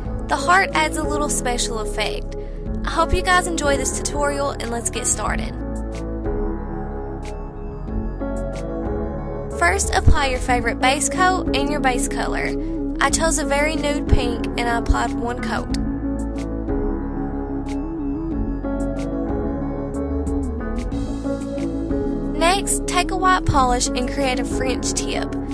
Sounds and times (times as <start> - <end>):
Ambient music: 0.0 - 25.5.